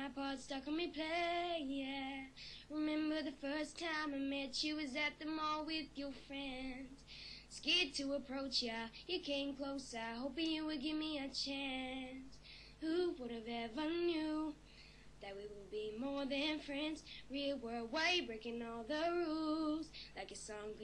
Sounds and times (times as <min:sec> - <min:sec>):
Child singing: 0:00.0 - 0:12.2, 0:12.8 - 0:14.6, 0:15.2 - 0:20.8.